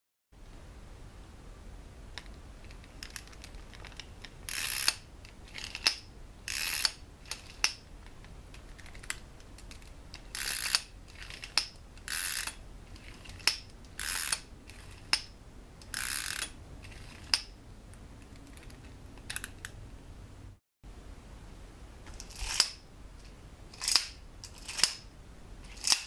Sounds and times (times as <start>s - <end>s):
Gears: 3.0s - 7.8s, 8.7s - 15.2s, 15.8s - 17.5s, 22.2s - 22.8s, 23.8s - 25.0s, 25.6s - 26.0s
Ratchet, pawl: 4.5s - 5.9s, 6.5s - 7.6s, 10.3s - 15.1s, 15.9s - 17.4s.